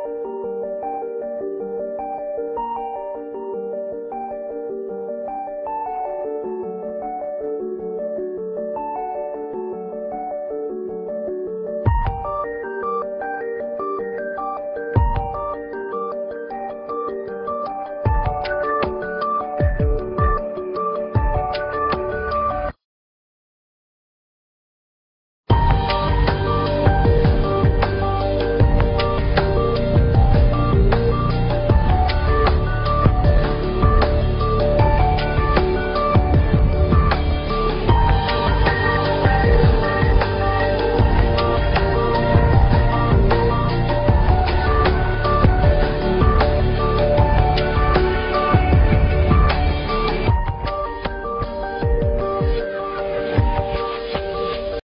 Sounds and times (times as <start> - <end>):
Music: 0.0 - 22.8, 25.5 - 54.8.